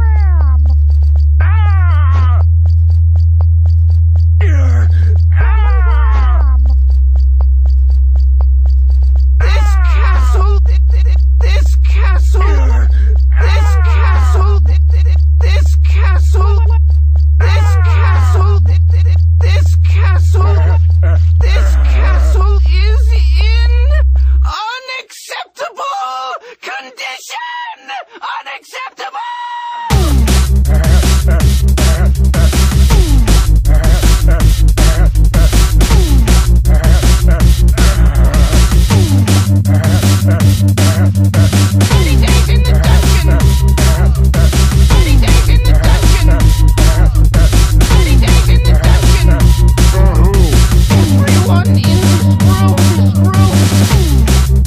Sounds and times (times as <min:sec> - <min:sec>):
Speech: 0:00.0 - 0:00.6, 0:01.4 - 0:02.4, 0:04.4 - 0:06.6, 0:09.4 - 0:16.8, 0:17.4 - 0:30.9, 0:41.9 - 0:44.2, 0:44.9 - 0:47.1, 0:47.9 - 0:54.2
Music: 0:00.0 - 0:23.8, 0:29.9 - 0:54.6.